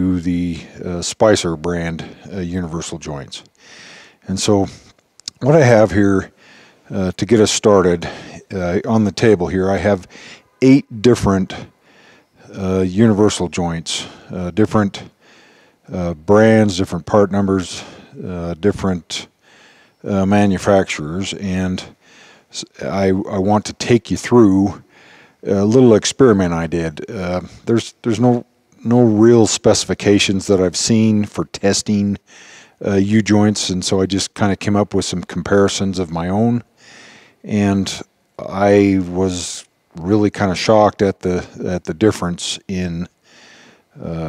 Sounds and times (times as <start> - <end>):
Speech: 0.0 - 3.5, 4.2 - 11.7, 12.4 - 15.1, 15.9 - 19.3, 20.0 - 24.8, 25.4 - 32.2, 32.8 - 36.7, 37.4 - 43.1, 44.0 - 44.2.